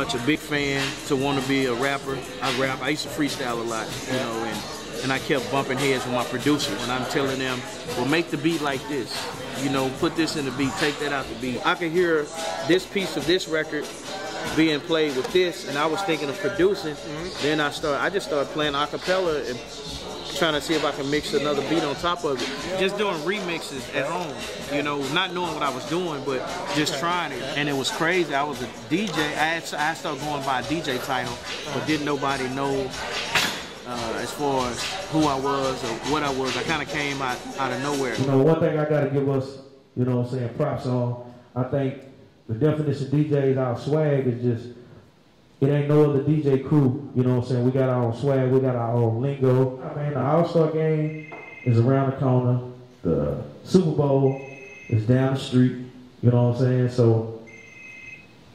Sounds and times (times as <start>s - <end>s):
Speech: 0.0s - 33.0s, 33.9s - 44.7s, 45.6s - 57.4s
Music: 0.0s - 38.3s.